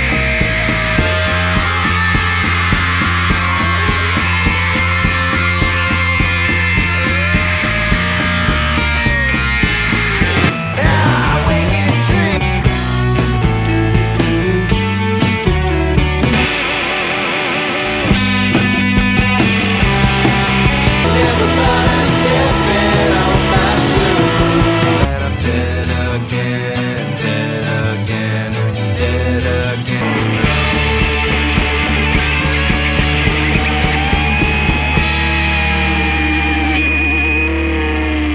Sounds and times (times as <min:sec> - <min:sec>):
Music: 0:00.0 - 0:38.3.